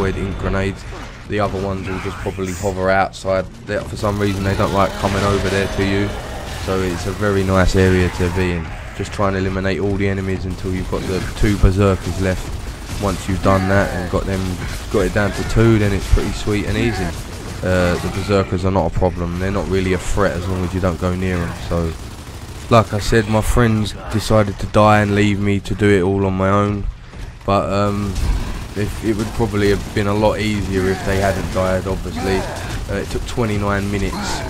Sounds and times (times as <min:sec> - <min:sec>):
Speech: 0:00.0 - 0:22.0, 0:22.7 - 0:26.9, 0:27.5 - 0:34.4.